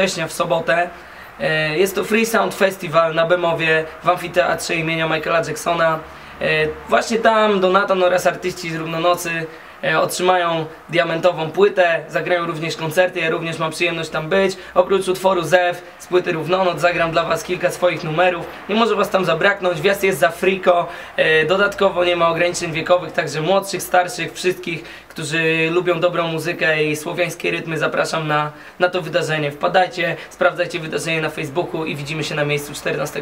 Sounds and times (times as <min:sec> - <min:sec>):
Speech: 0:00.0 - 0:33.2.